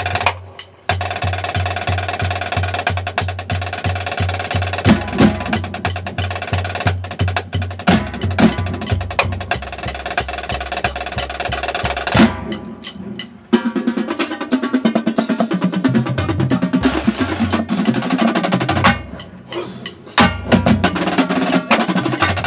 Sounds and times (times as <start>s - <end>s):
Wood block: 18.8s - 22.4s.